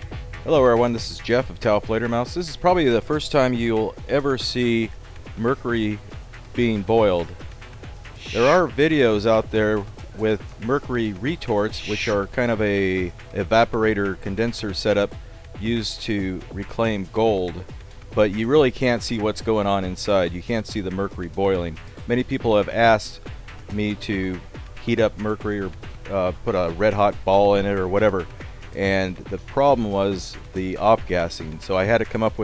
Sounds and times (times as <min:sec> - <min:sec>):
Music: 0:00.0 - 0:32.4
Speech: 0:00.5 - 0:06.0, 0:06.6 - 0:07.3, 0:08.2 - 0:17.6, 0:18.2 - 0:32.4.